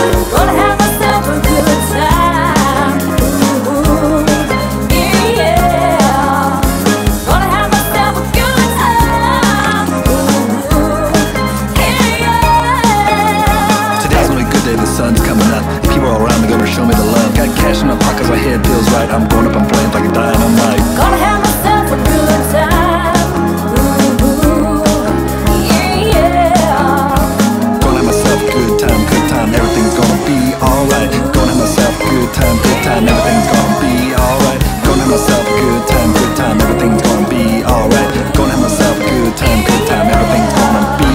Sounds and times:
Music: 0:00.0 - 0:41.1.

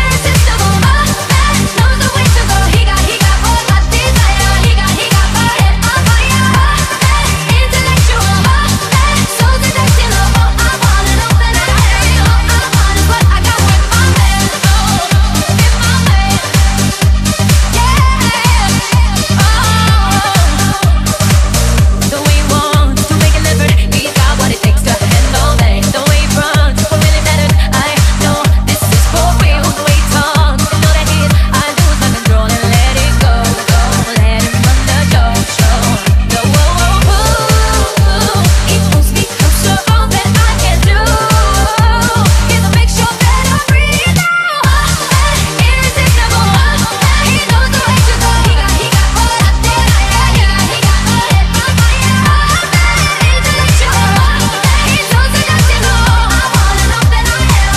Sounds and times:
Dance music: 0:00.0 - 0:57.7.

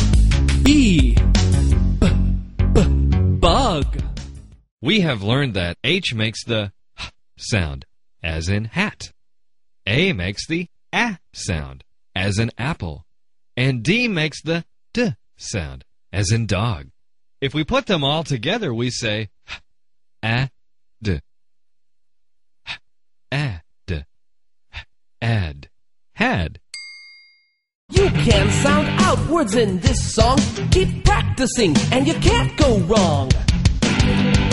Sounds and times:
Music: 0:00.0 - 0:04.6, 0:27.9 - 0:34.5
Speech: 0:00.6 - 0:01.2, 0:02.8 - 0:04.1, 0:04.8 - 0:06.8, 0:07.4 - 0:09.2, 0:09.9 - 0:19.3, 0:20.2 - 0:21.2, 0:23.3 - 0:24.1, 0:25.2 - 0:26.6, 0:27.9 - 0:33.4.

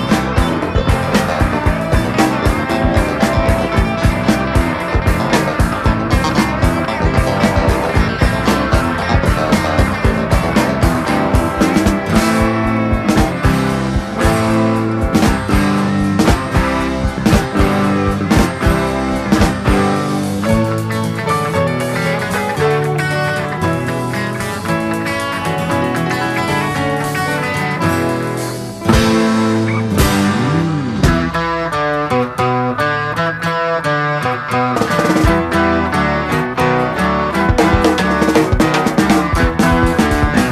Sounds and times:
Psychedelic rock: 0:00.0 - 0:40.5.

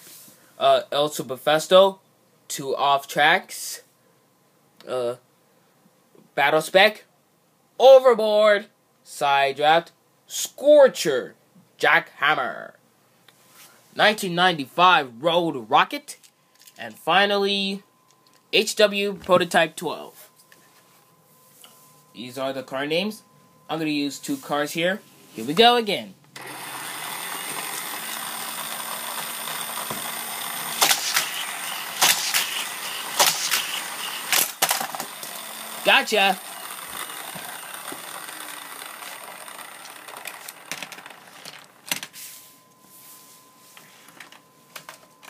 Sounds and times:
Speech: 0:00.6 - 0:03.9, 0:04.8 - 0:05.2, 0:06.3 - 0:07.1, 0:07.8 - 0:12.8, 0:14.0 - 0:16.2, 0:16.8 - 0:17.9, 0:18.6 - 0:20.3, 0:22.2 - 0:26.2, 0:35.9 - 0:36.4.

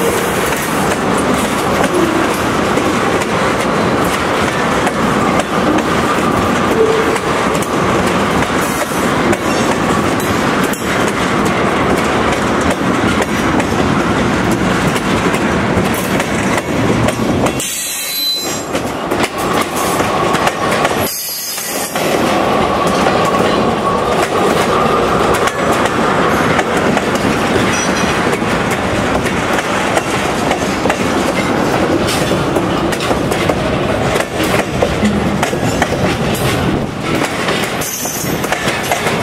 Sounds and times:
Clickety-clack: 0:00.0 - 0:39.2
Railroad car, train wagon: 0:00.0 - 0:39.2
Train: 0:00.0 - 0:39.2.

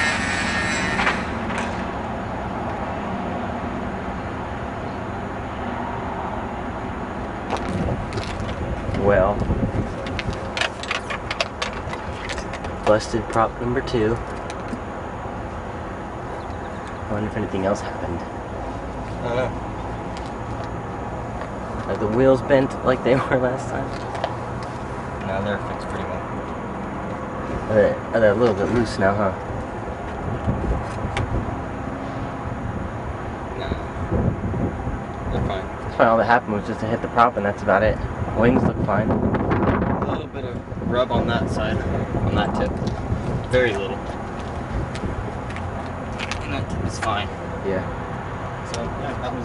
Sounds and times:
Speech: 0:09.0 - 0:09.4, 0:12.8 - 0:14.2, 0:17.1 - 0:18.3, 0:19.2 - 0:19.6, 0:21.8 - 0:24.0, 0:25.2 - 0:26.2, 0:27.7 - 0:29.4, 0:33.6 - 0:33.9, 0:35.3 - 0:39.1, 0:40.0 - 0:42.7, 0:43.5 - 0:44.0, 0:46.4 - 0:47.9, 0:48.7 - 0:49.4.

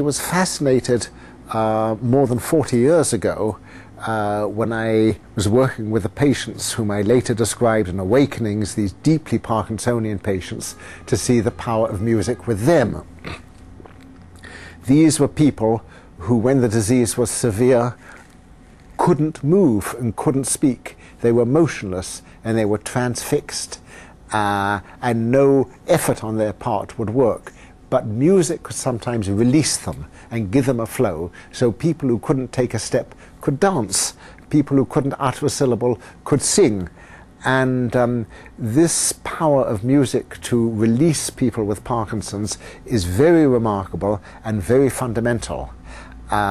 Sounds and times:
Speech: 0:00.0 - 0:13.4, 0:14.8 - 0:18.0, 0:19.0 - 0:46.5.

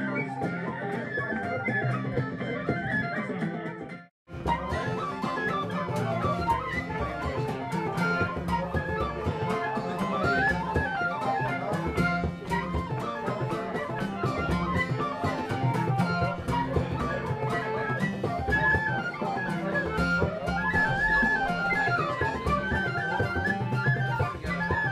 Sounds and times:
Flute: 0:00.0 - 0:24.9.

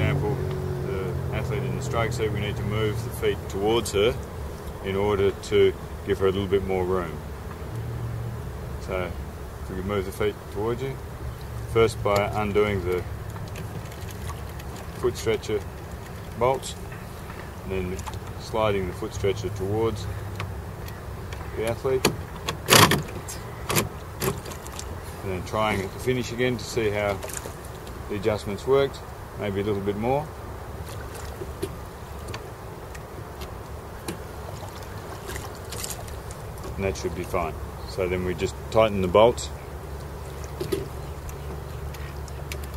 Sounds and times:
Speech: 0:00.0 - 0:04.2, 0:04.8 - 0:07.2, 0:08.8 - 0:11.0, 0:11.7 - 0:13.1, 0:15.0 - 0:15.6, 0:16.4 - 0:16.8, 0:17.7 - 0:20.1, 0:21.6 - 0:22.1, 0:25.2 - 0:27.3, 0:28.1 - 0:30.3, 0:36.8 - 0:39.6
Boat, Water vehicle: 0:00.0 - 0:07.1, 0:09.8 - 0:30.2, 0:30.8 - 0:42.7.

